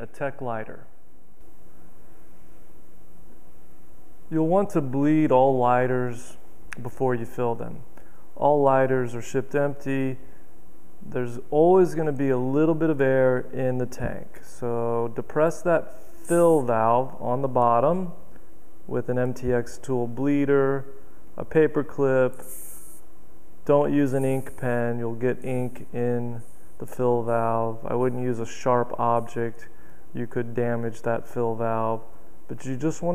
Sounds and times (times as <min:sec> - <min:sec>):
Speech: 0:00.0 - 0:01.0, 0:04.3 - 0:10.2, 0:11.0 - 0:18.3, 0:18.9 - 0:22.5, 0:23.6 - 0:33.1.